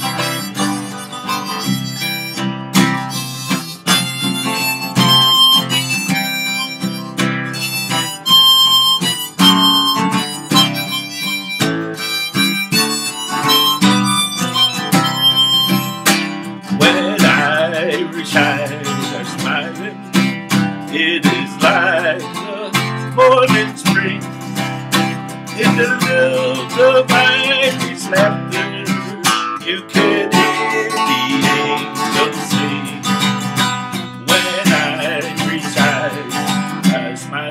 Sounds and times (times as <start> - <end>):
Strum: 0.0 - 37.1.